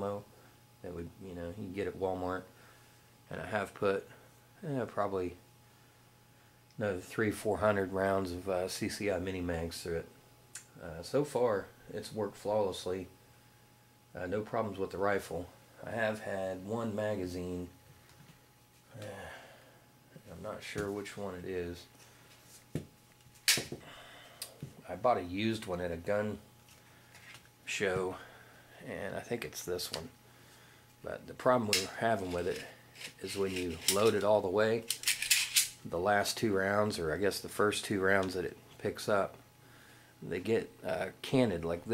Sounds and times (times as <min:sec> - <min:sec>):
Speech: 0:00.0 - 0:02.5, 0:03.3 - 0:05.4, 0:06.8 - 0:10.1, 0:10.7 - 0:13.2, 0:14.1 - 0:17.8, 0:20.2 - 0:21.9, 0:24.8 - 0:26.4, 0:27.7 - 0:30.2, 0:31.0 - 0:34.9, 0:35.9 - 0:39.4, 0:40.2 - 0:41.9
Inside, small room: 0:00.0 - 0:41.9.